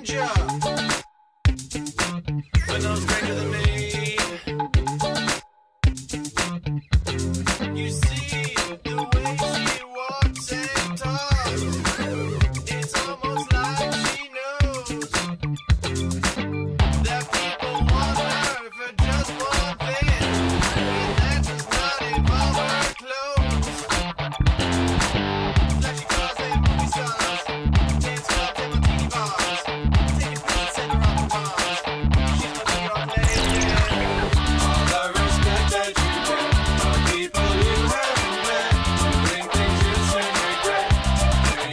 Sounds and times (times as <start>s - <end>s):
Funk: 0.0s - 41.7s.